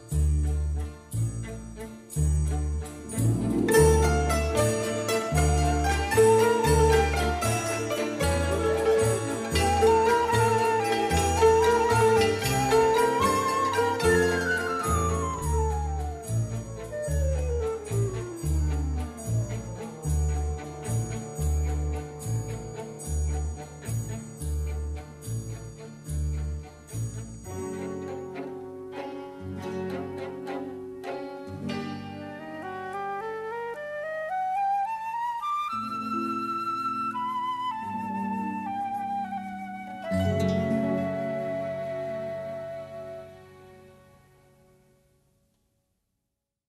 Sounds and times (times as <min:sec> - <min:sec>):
Flute: 0:03.1 - 0:23.7, 0:27.6 - 0:44.4.